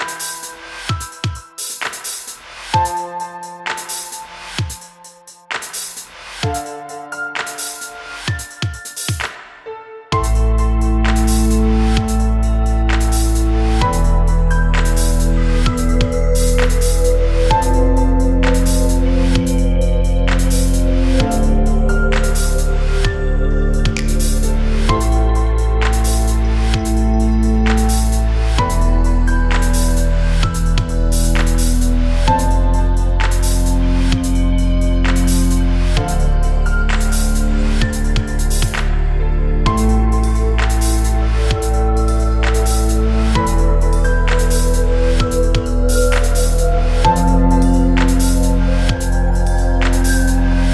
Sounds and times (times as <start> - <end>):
Dubstep: 0.0 - 50.7.